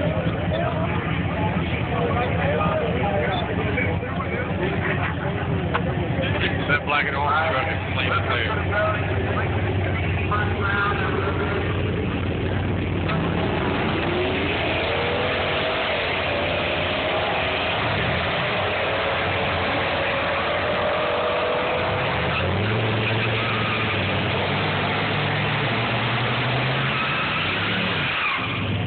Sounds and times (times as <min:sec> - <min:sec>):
Speech: 0:00.0 - 0:11.9
Vehicle: 0:00.0 - 0:28.8.